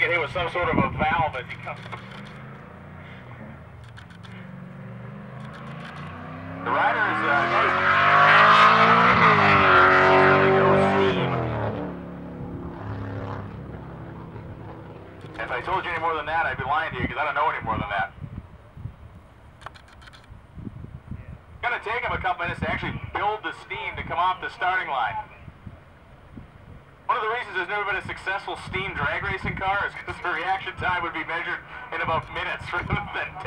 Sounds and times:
Speech: 0.0 - 1.8, 6.6 - 7.8, 15.4 - 18.2, 21.2 - 25.5, 27.1 - 33.4
Vehicle: 0.0 - 33.4.

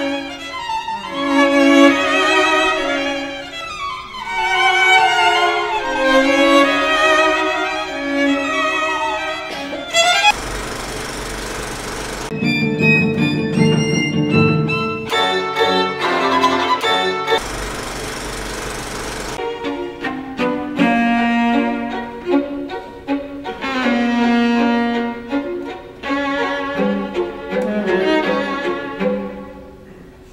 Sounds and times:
Music: 0.0 - 10.3, 12.3 - 17.4, 19.4 - 30.2.

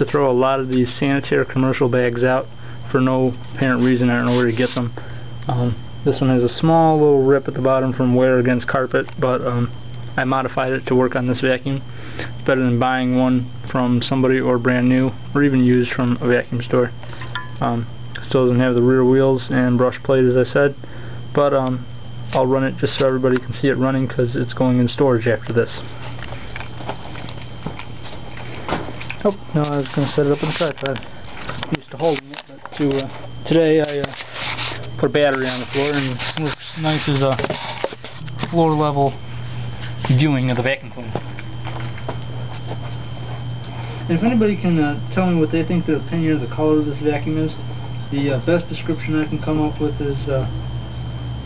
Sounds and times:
Speech: 0.0 - 4.9, 5.5 - 11.8, 12.4 - 17.0, 17.6 - 20.8, 21.4 - 25.9, 29.2 - 31.0, 31.7 - 34.2, 35.0 - 37.5, 38.2 - 39.2, 40.0 - 41.2, 44.1 - 50.5.

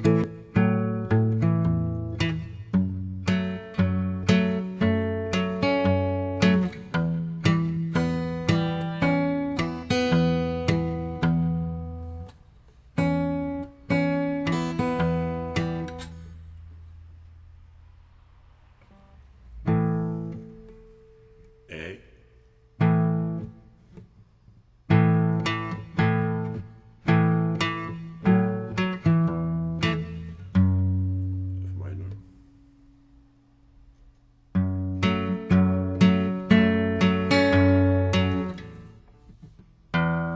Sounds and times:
Acoustic guitar: 0.0 - 40.3
Strum: 0.0 - 40.3.

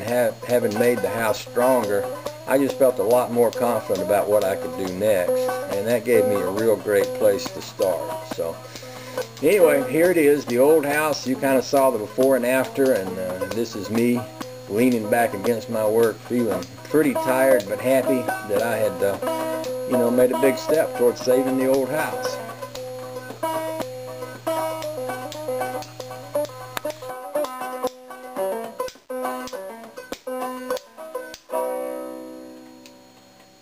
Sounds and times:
Speech: 0.0 - 8.6, 9.4 - 19.2, 19.9 - 22.5
Music: 0.0 - 33.6.

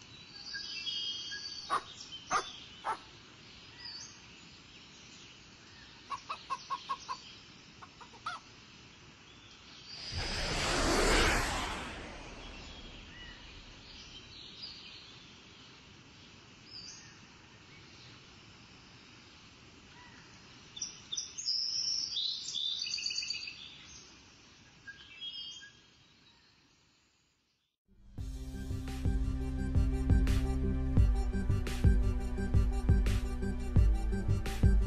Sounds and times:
Chirp, tweet: 0.0 - 7.6, 13.9 - 15.8, 16.7 - 18.2, 20.0 - 24.2, 24.8 - 27.6
Outside, rural or natural: 0.0 - 34.8.

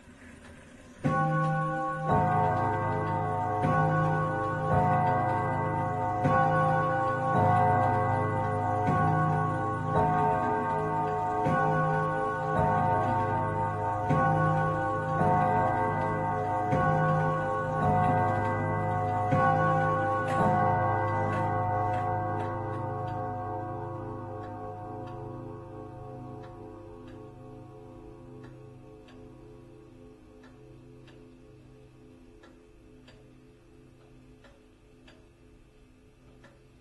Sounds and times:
Tick-tock: 0.4 - 27.7, 28.3 - 36.8.

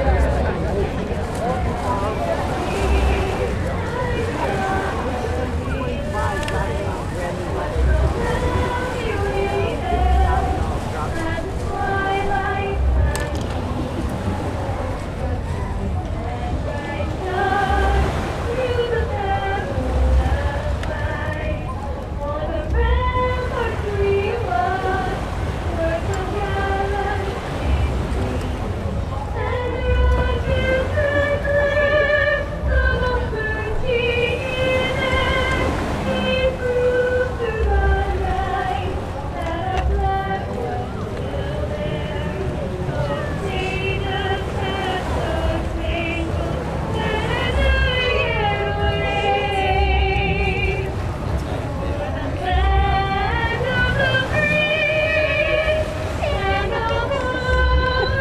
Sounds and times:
Waves, surf: 0.0 - 58.2.

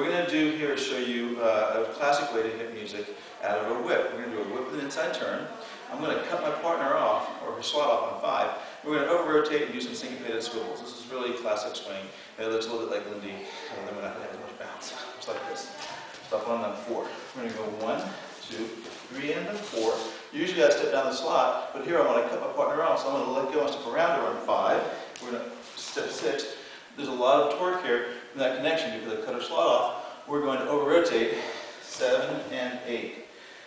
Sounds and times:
Speech: 0.0 - 33.2.

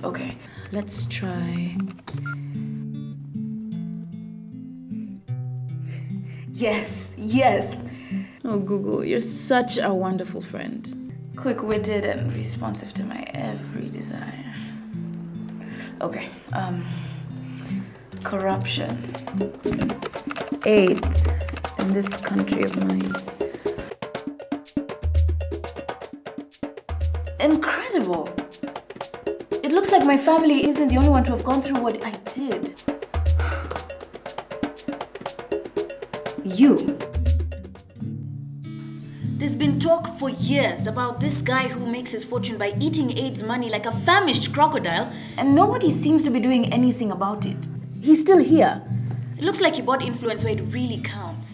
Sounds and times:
Wood block: 19.0 - 24.0, 26.9 - 37.8.

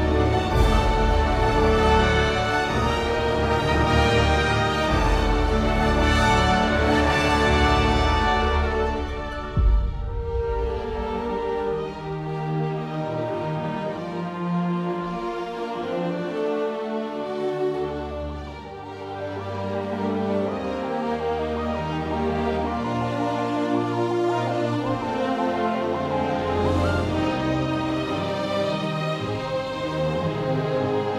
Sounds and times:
Orchestra: 0.0 - 31.1.

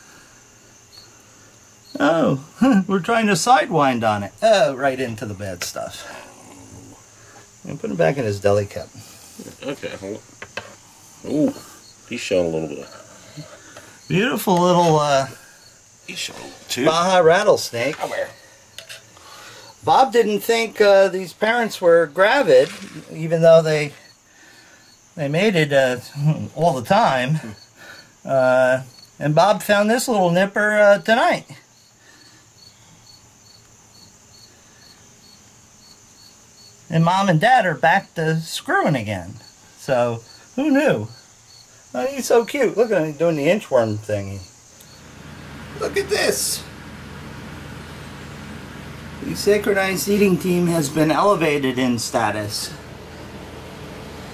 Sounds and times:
Cricket: 0.0 - 46.3, 49.8 - 54.2.

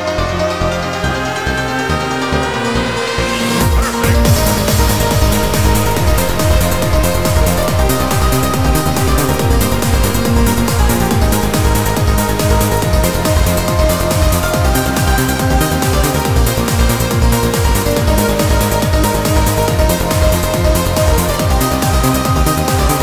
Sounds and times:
Techno: 0.0 - 23.0
Trance music: 0.0 - 23.0.

